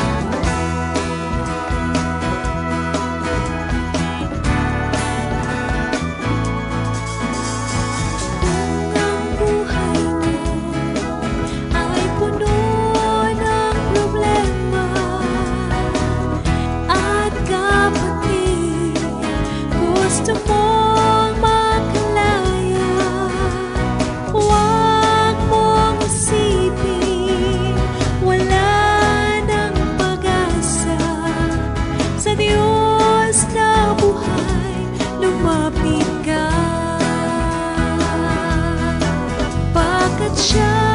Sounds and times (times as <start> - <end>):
Music: 0.0 - 40.9.